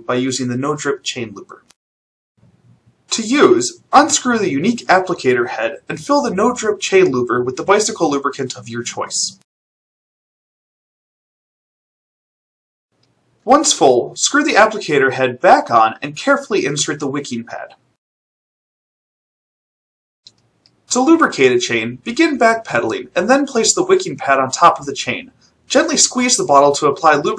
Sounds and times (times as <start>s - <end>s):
Speech: 0.0s - 1.7s, 3.1s - 9.5s, 13.5s - 17.8s, 20.9s - 27.3s.